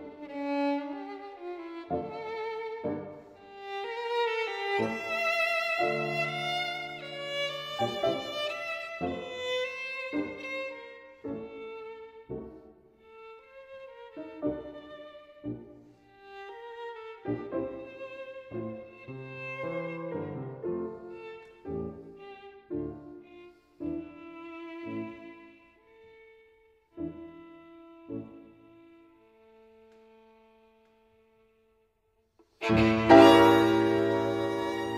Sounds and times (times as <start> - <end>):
Violin, fiddle: 0.0 - 31.7, 32.6 - 34.9.